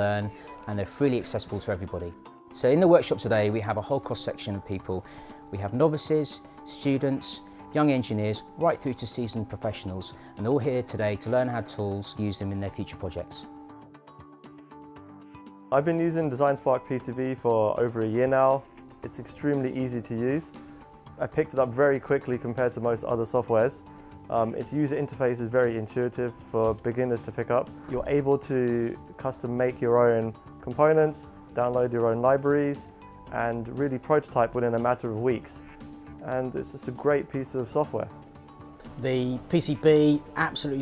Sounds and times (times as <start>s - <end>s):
Speech: 0.0s - 13.5s, 15.8s - 20.5s, 21.2s - 38.1s, 39.0s - 40.8s
Music: 0.0s - 40.8s.